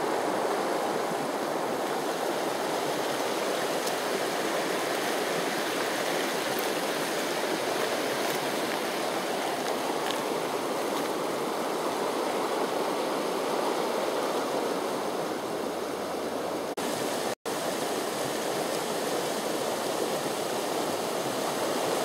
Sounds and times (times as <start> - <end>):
Outside, rural or natural: 0.0 - 22.0
Snake: 0.0 - 22.0.